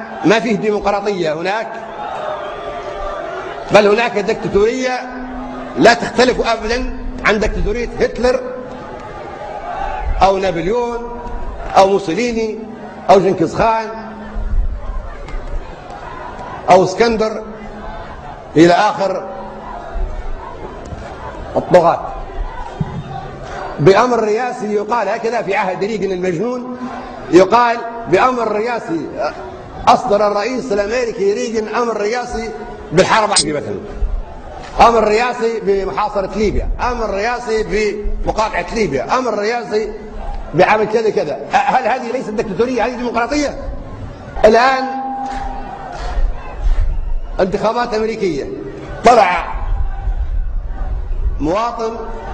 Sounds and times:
Male speech, man speaking: 0.0s - 1.8s, 3.7s - 5.2s, 5.8s - 8.6s, 10.2s - 11.2s, 11.8s - 14.1s, 16.7s - 17.5s, 18.6s - 19.3s, 21.6s - 22.2s, 23.8s - 33.9s, 34.8s - 40.0s, 40.6s - 43.7s, 44.4s - 45.2s, 47.4s - 49.6s, 51.4s - 52.2s
Narration, monologue: 0.0s - 1.8s, 3.7s - 8.8s, 10.2s - 14.0s, 23.8s - 34.0s, 34.8s - 43.8s, 44.4s - 45.3s.

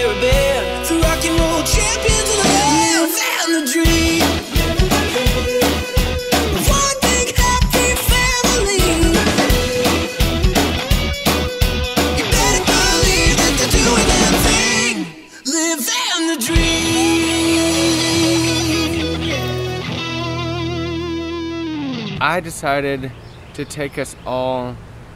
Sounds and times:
Music: 0.0s - 22.2s.

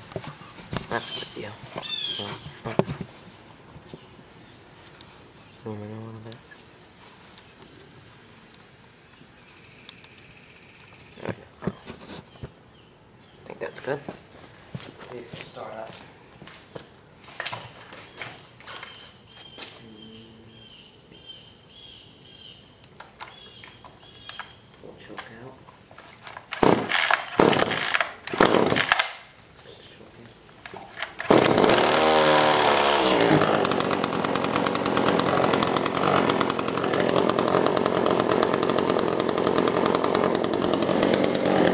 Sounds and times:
Speech: 5.6s - 6.4s, 13.4s - 14.2s, 15.0s - 16.0s, 19.8s - 20.6s, 24.8s - 25.6s, 29.6s - 30.9s.

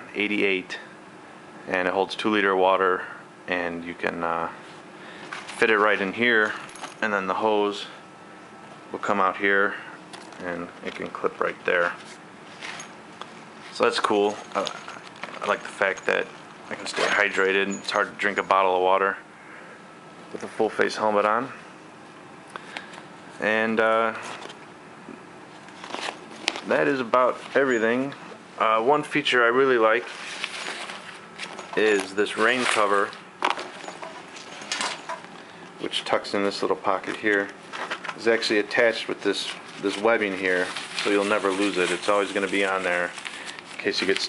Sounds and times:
Speech: 0.0s - 0.9s, 1.7s - 4.6s, 5.5s - 8.0s, 8.9s - 12.0s, 13.7s - 14.8s, 15.4s - 19.2s, 20.3s - 21.6s, 23.4s - 24.3s, 26.6s - 30.1s, 31.7s - 33.2s, 35.8s - 37.6s, 38.2s - 43.2s, 43.8s - 44.2s
Inside, small room: 0.0s - 44.2s.

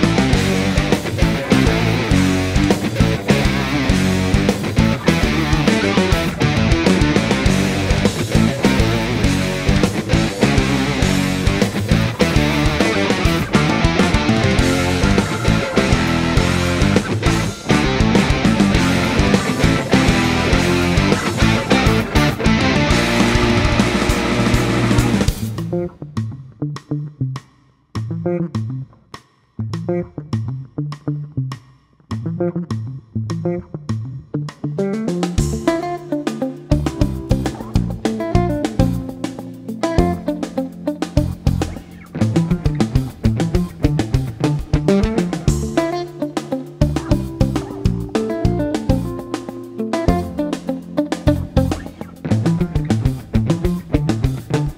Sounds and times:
Electric guitar: 0.0s - 29.0s, 29.6s - 54.7s.

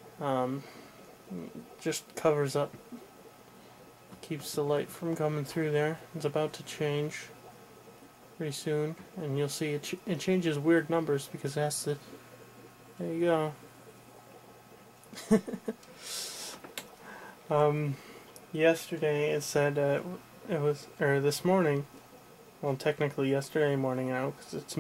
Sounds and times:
Speech: 4.2s - 7.3s, 8.4s - 12.0s, 13.0s - 13.6s, 18.6s - 21.9s, 22.6s - 24.8s.

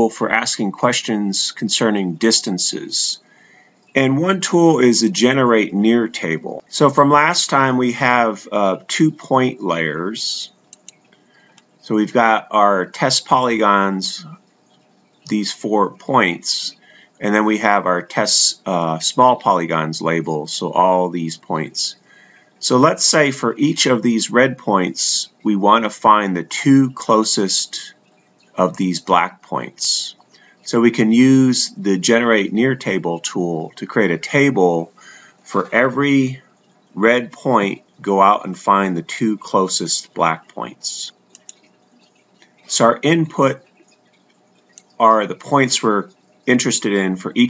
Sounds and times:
Speech: 0.0s - 3.3s, 4.0s - 10.6s, 11.8s - 14.4s, 15.3s - 22.0s, 22.6s - 28.0s, 28.6s - 36.4s, 37.0s - 41.2s, 42.7s - 43.7s, 45.0s - 47.4s.

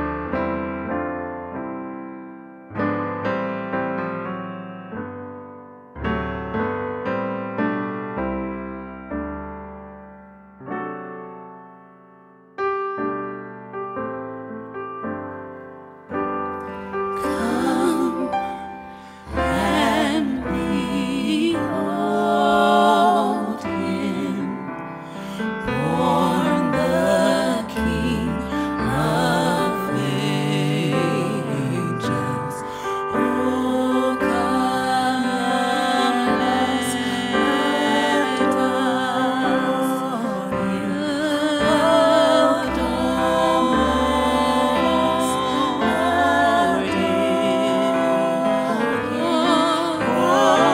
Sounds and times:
Music: 0.0s - 50.7s.

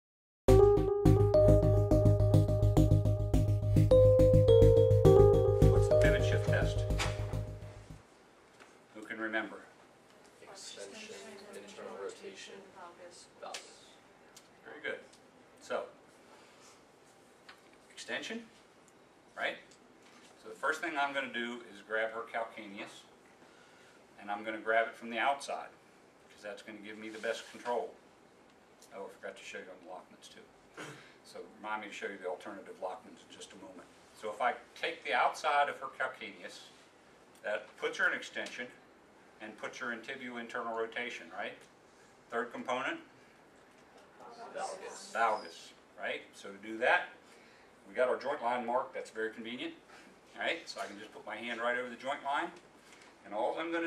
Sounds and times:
Synthesizer: 0.5s - 8.0s.

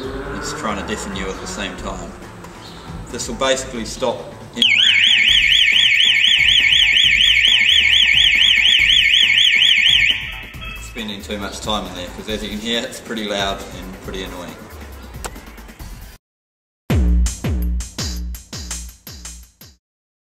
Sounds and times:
Music: 0.0s - 16.2s, 16.9s - 19.8s
Speech: 0.4s - 2.2s, 3.1s - 4.3s, 10.8s - 14.6s.

